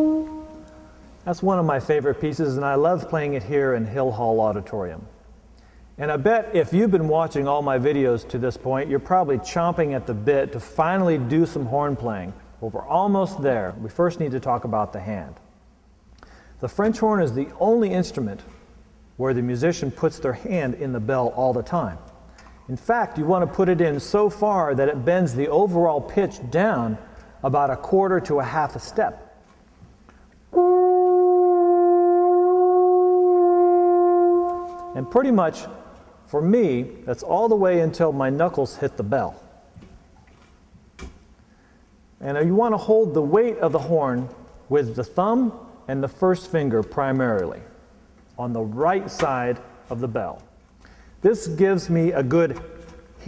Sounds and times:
Speech: 1.3s - 5.1s, 6.0s - 15.4s, 16.6s - 18.5s, 19.2s - 22.0s, 22.7s - 29.2s, 35.0s - 39.4s, 42.2s - 47.8s, 48.4s - 50.5s, 51.2s - 52.6s.

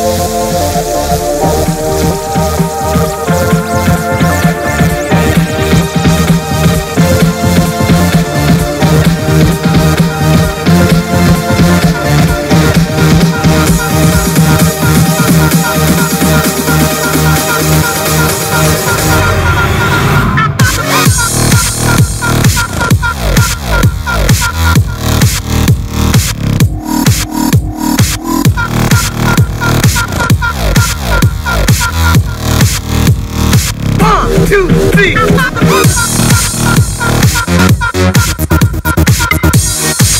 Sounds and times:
Background music: 0.0s - 40.1s.

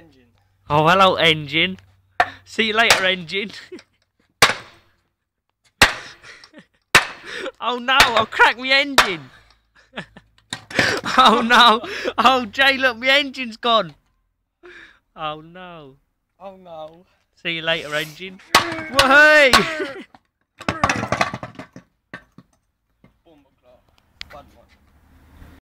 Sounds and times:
Speech: 0.0s - 1.8s, 7.6s - 9.2s, 15.2s - 20.0s, 23.2s - 24.8s.

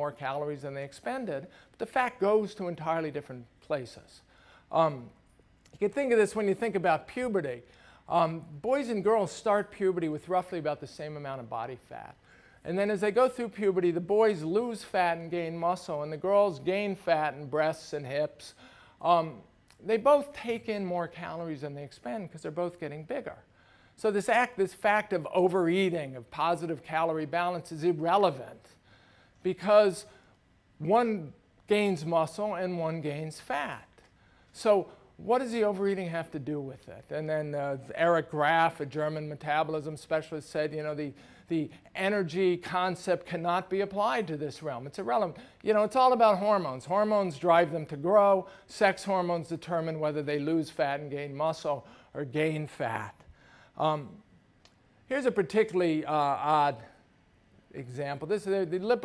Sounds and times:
Speech: 0.0s - 28.8s, 29.4s - 30.2s, 30.8s - 34.0s, 34.6s - 54.2s, 55.1s - 57.0s, 57.7s - 59.0s.

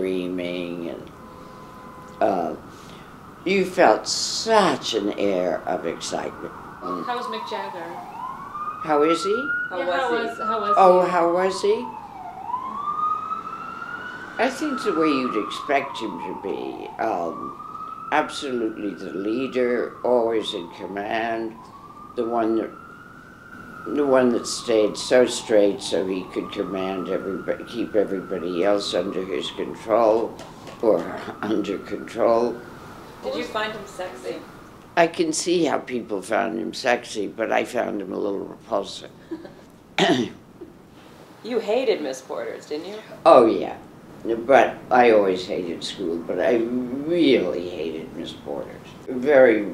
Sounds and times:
Police car (siren): 0.0s - 39.6s, 44.3s - 49.7s.

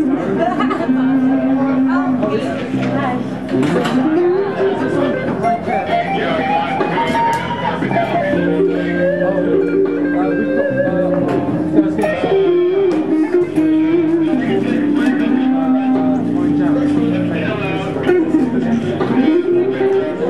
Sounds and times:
Speech: 0.0s - 20.3s.

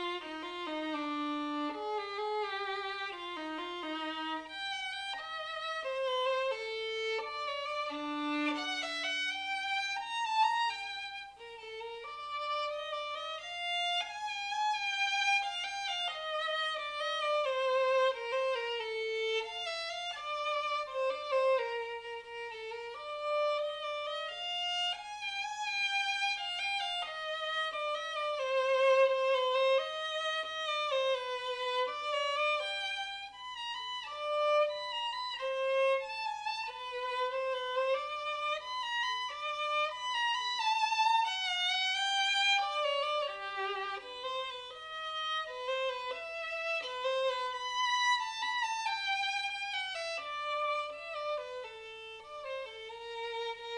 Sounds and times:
Violin, fiddle: 0.0s - 53.7s.

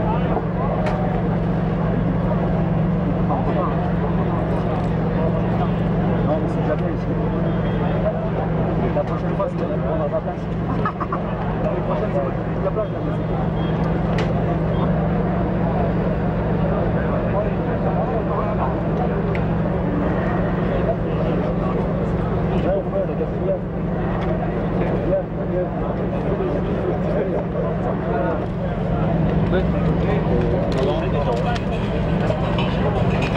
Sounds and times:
Speech: 0.0s - 33.3s
Vehicle: 0.0s - 33.3s.

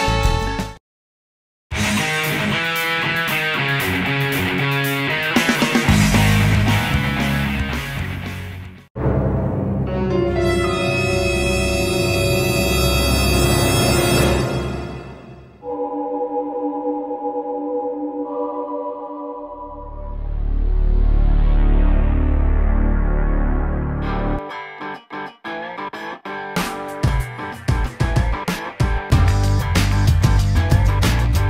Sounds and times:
Scary music: 9.0s - 24.4s.

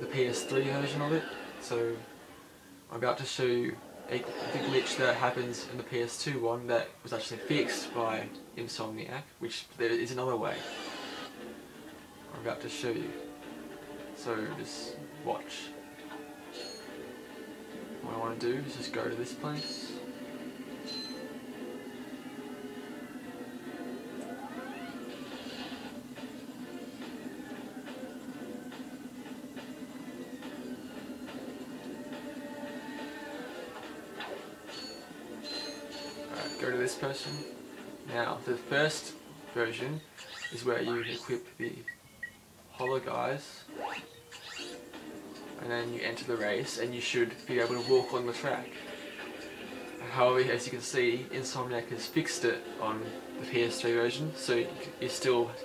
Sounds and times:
Speech: 0.0s - 2.0s, 2.9s - 10.7s, 12.3s - 13.2s, 14.2s - 15.7s, 18.0s - 20.0s, 36.4s - 37.4s, 38.1s - 40.0s, 40.6s - 41.9s, 42.7s - 43.7s, 45.6s - 48.7s, 50.0s - 55.6s.

